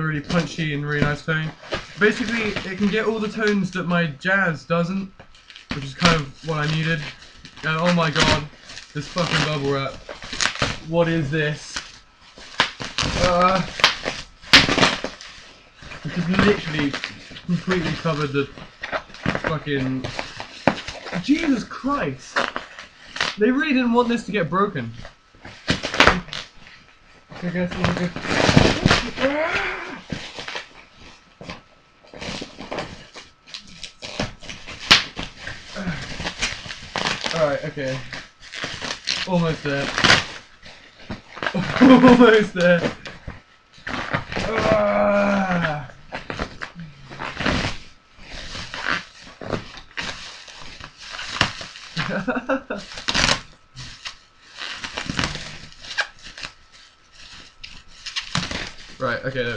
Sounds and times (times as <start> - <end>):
Speech: 0.0 - 5.1, 5.8 - 10.0, 10.9 - 11.8, 13.2 - 13.7, 16.1 - 18.5, 19.5 - 20.1, 21.2 - 22.4, 23.4 - 25.0, 27.4 - 28.2, 37.3 - 38.1, 39.3 - 40.0, 41.6 - 42.9, 59.0 - 59.5.